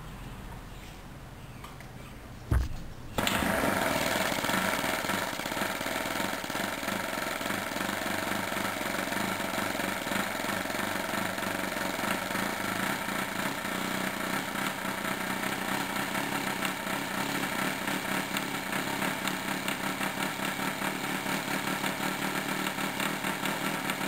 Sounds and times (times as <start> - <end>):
Idling: 3.2 - 24.0
Medium engine (mid frequency): 3.2 - 24.0.